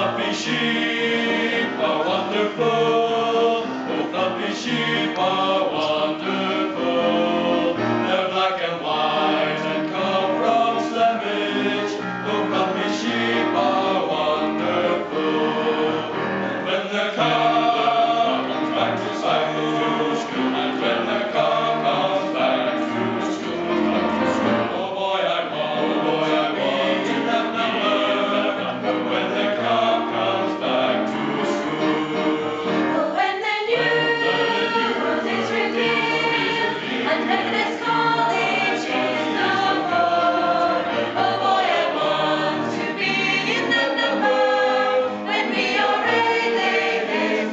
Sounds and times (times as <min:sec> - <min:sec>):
Music: 0:00.0 - 0:47.5.